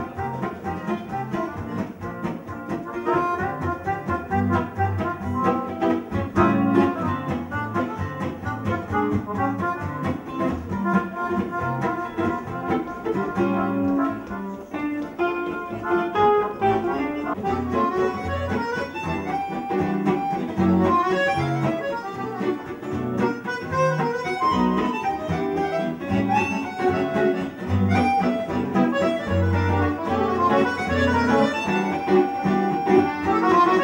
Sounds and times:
Strum: 0:00.0 - 0:33.8.

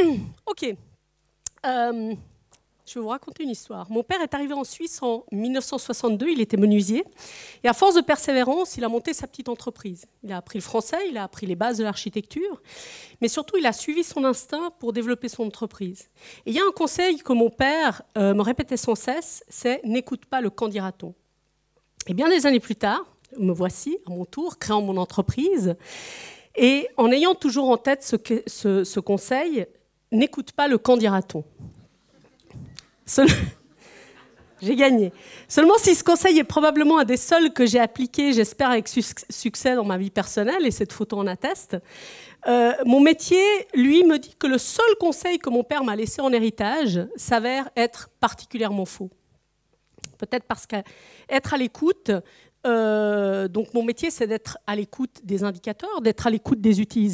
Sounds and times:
Speech: 0:00.0 - 0:00.8, 0:01.5 - 0:02.2, 0:02.9 - 0:07.1, 0:07.7 - 0:12.6, 0:13.2 - 0:21.2, 0:22.0 - 0:25.8, 0:26.6 - 0:31.5, 0:34.6 - 0:41.8, 0:42.5 - 0:49.2, 0:50.2 - 0:57.1.

